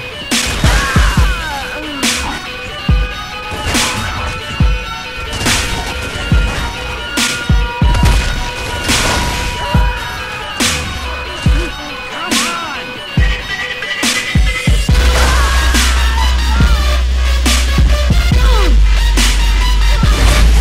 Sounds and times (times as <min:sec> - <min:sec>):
Music: 0:00.0 - 0:20.6.